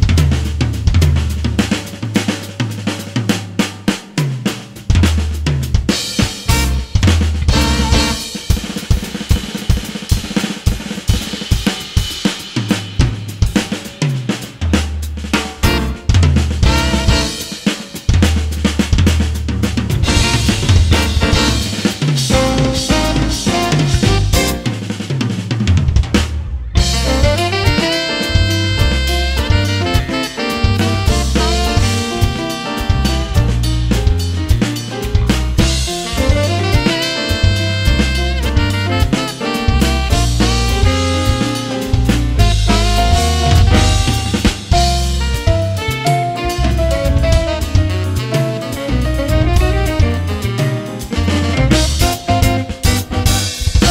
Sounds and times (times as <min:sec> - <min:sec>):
Brass instrument: 0:00.0 - 0:53.9
Saxophone: 0:06.4 - 0:08.5, 0:15.6 - 0:17.7, 0:20.0 - 0:24.8, 0:26.8 - 0:34.7, 0:35.6 - 0:53.9.